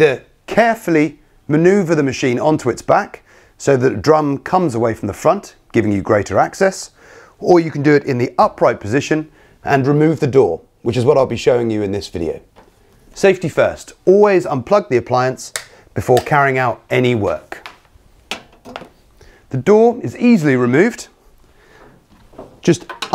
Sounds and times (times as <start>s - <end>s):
Speech: 0.0s - 12.5s, 13.2s - 17.7s, 19.5s - 21.2s, 22.6s - 23.1s.